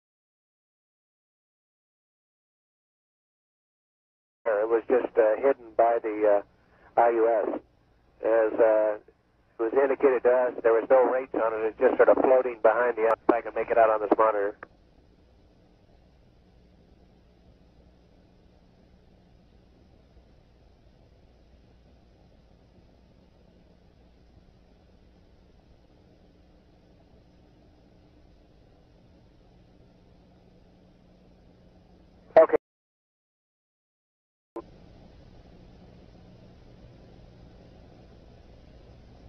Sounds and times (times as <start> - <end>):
Speech: 4.5 - 7.6, 8.2 - 14.6, 32.4 - 32.6.